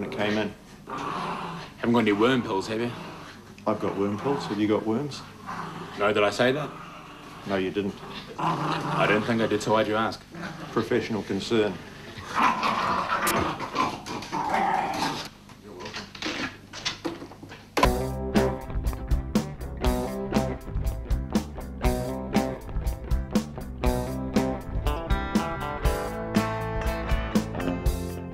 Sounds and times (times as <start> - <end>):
Speech: 0.0 - 0.6, 1.8 - 3.0, 3.6 - 5.3, 6.0 - 6.8, 7.5 - 8.0, 9.0 - 11.8.